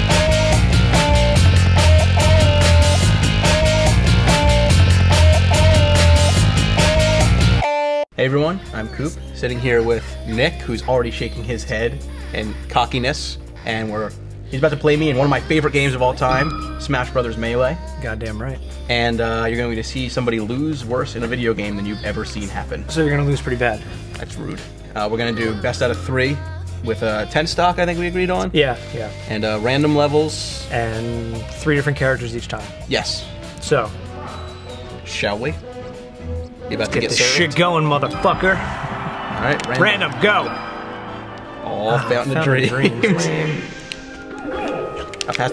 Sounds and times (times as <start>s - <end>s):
Music: 0.0s - 45.5s
Speech: 8.2s - 33.9s, 36.7s - 38.6s, 41.7s - 43.7s.